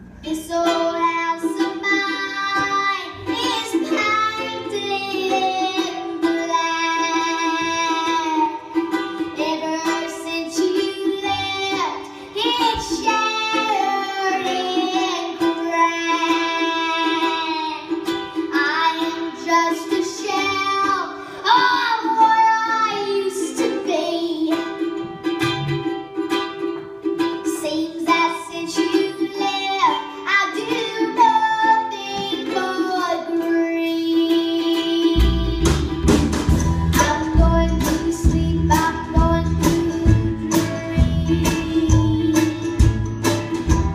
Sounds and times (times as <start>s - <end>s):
Inside, large room or hall: 0.0s - 43.9s
Music: 0.0s - 43.9s.